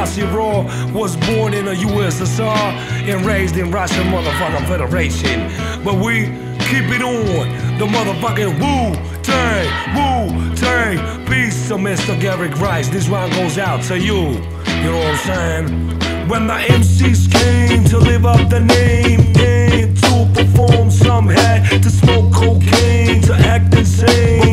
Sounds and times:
Music: 0.0s - 24.5s.

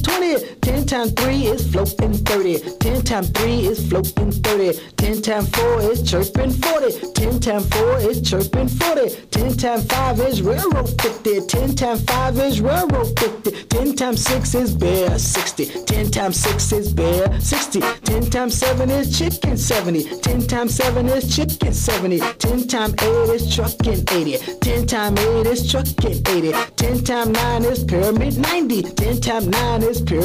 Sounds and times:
Rock and roll: 0.0s - 30.2s.

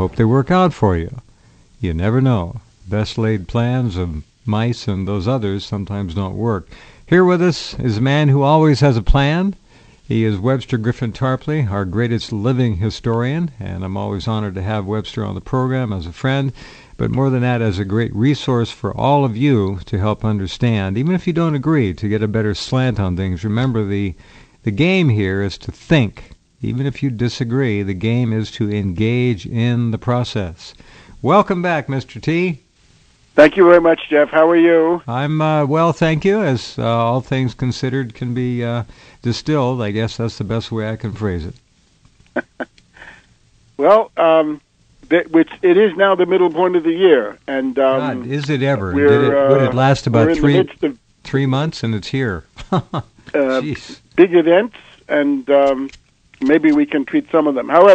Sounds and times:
Speech: 0.0s - 1.2s, 1.8s - 32.6s, 33.4s - 41.6s, 43.8s - 52.5s, 53.3s - 57.9s.

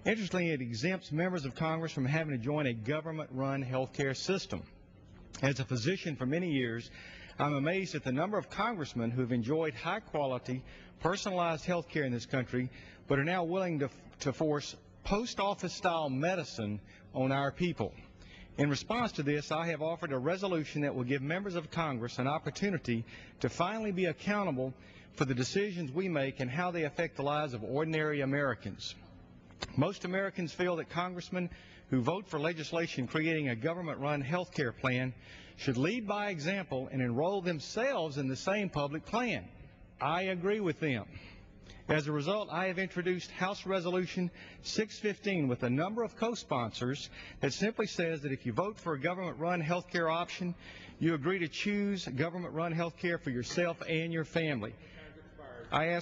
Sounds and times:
Speech: 0.0s - 4.8s, 5.4s - 18.0s, 18.6s - 29.0s, 29.6s - 41.2s, 41.9s - 56.0s.

